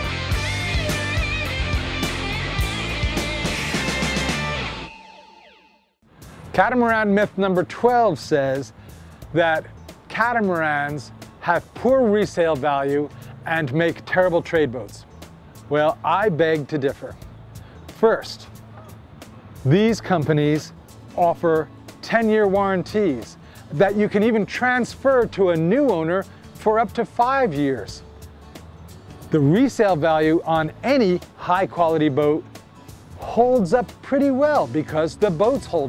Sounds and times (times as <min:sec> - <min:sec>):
Music: 0:00.0 - 0:35.8
Speech: 0:06.6 - 0:08.7, 0:09.4 - 0:15.0, 0:15.7 - 0:17.2, 0:18.0 - 0:18.5, 0:19.6 - 0:28.0, 0:29.3 - 0:32.4, 0:33.2 - 0:35.8.